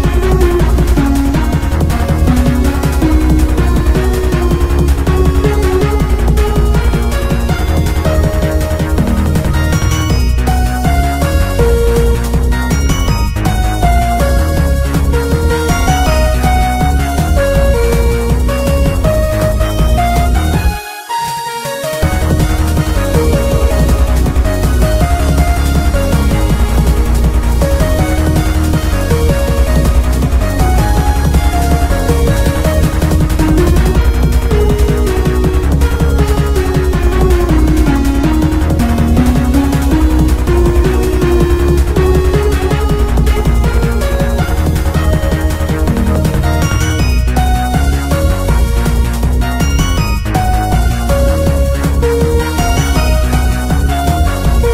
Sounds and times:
Jazz: 0.0s - 54.7s
Soundtrack music: 0.0s - 54.7s.

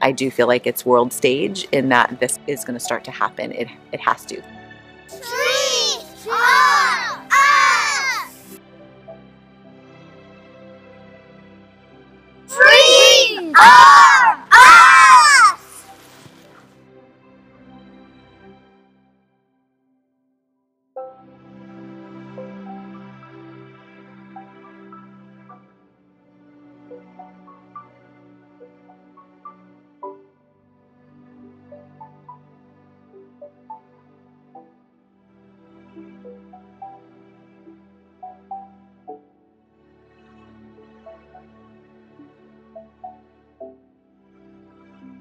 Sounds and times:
Speech: 0.0s - 4.5s, 12.5s - 14.3s
Music: 0.0s - 45.2s
Screaming: 6.3s - 8.4s, 12.5s - 15.8s.

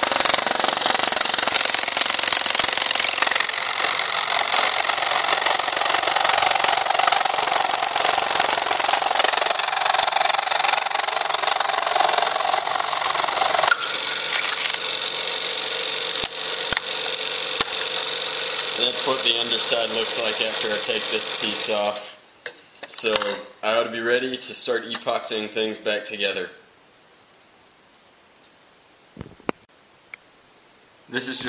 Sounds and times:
Speech: 18.8s - 22.2s, 22.9s - 26.6s, 31.1s - 31.4s.

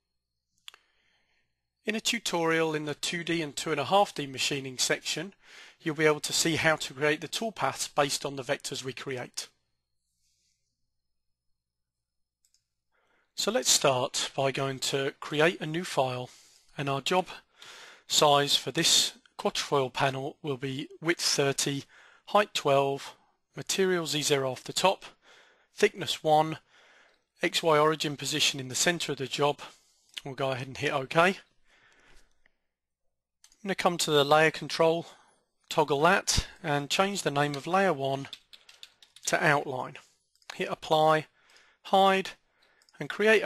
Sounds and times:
Speech: 1.8s - 9.6s, 13.4s - 17.4s, 18.1s - 25.2s, 25.8s - 26.6s, 27.4s - 31.5s, 33.6s - 38.4s, 39.2s - 41.3s, 41.9s - 42.4s, 43.0s - 43.4s.

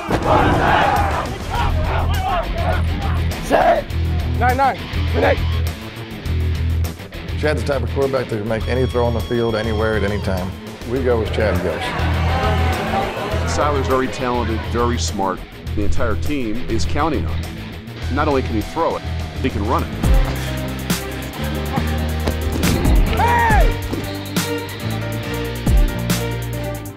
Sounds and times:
Music: 0.0s - 26.9s
Speech: 7.4s - 11.9s, 13.5s - 17.4s, 18.1s - 19.9s.

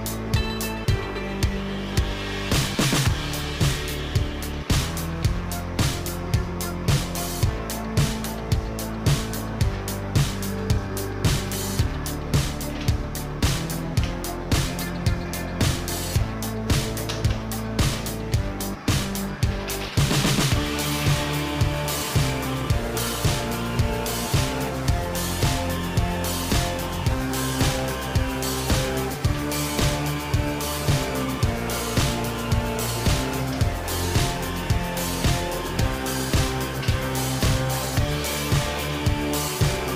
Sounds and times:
Music: 0.0s - 39.9s.

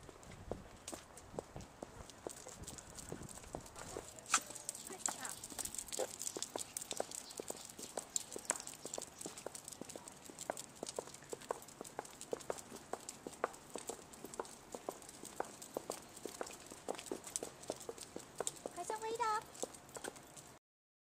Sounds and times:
Walk, footsteps: 0.0s - 20.6s
Speech: 3.9s - 5.6s, 18.7s - 19.5s.

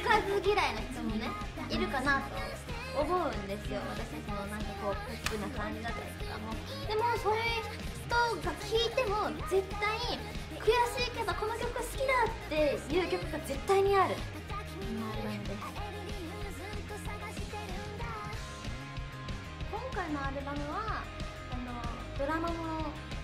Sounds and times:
Speech: 0.0s - 14.3s
Music: 0.0s - 23.2s.

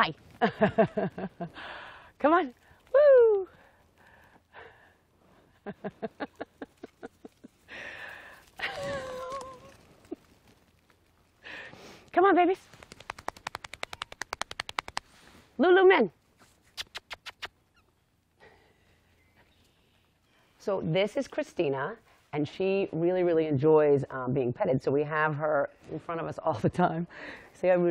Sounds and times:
Speech: 12.1s - 12.6s, 20.6s - 27.9s.

